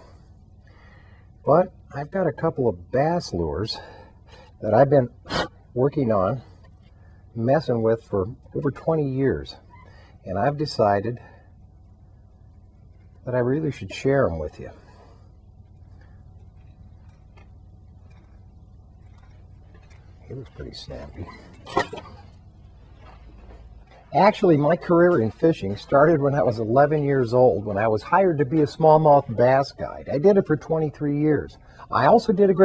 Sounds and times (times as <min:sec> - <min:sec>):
Speech: 0:01.5 - 0:04.0, 0:04.6 - 0:06.5, 0:07.4 - 0:09.6, 0:10.2 - 0:11.4, 0:13.2 - 0:14.8, 0:20.2 - 0:21.6, 0:24.1 - 0:32.6.